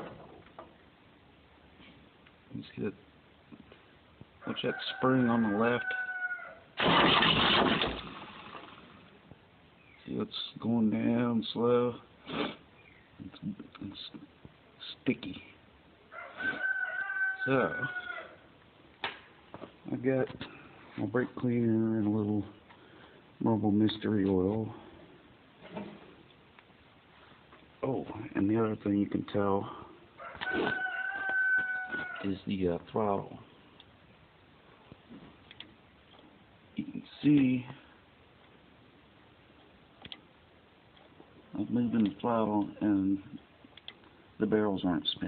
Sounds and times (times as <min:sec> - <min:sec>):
Speech: 0:02.5 - 0:03.0, 0:04.5 - 0:06.0, 0:10.0 - 0:12.1, 0:13.2 - 0:15.6, 0:19.9 - 0:22.6, 0:23.4 - 0:24.9, 0:27.8 - 0:29.9, 0:32.2 - 0:33.5, 0:36.8 - 0:37.9, 0:41.5 - 0:43.4, 0:44.4 - 0:45.2.